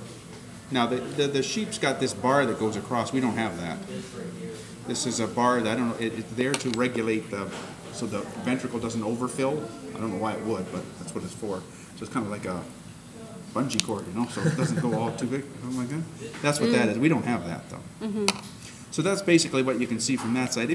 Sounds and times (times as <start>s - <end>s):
Speech: 0.7s - 12.7s, 13.6s - 18.3s.